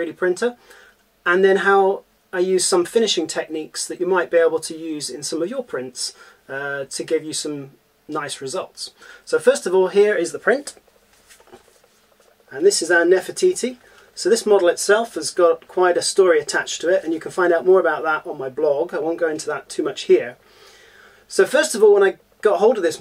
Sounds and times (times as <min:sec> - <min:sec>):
Speech: 0:00.0 - 0:00.6, 0:01.2 - 0:10.8, 0:12.5 - 0:20.4, 0:21.3 - 0:23.0.